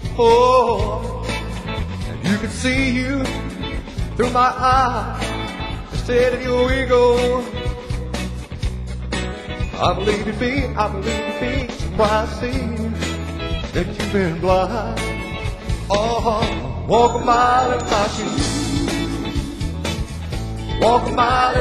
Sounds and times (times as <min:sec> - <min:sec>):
Music: 0:00.0 - 0:21.6.